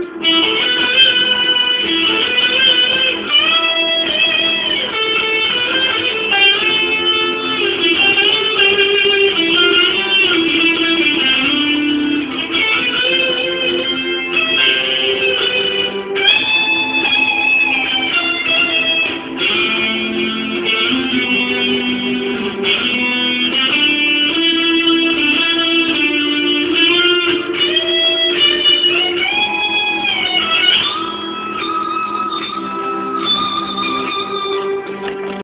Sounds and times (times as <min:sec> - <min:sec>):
Music: 0:00.0 - 0:35.4.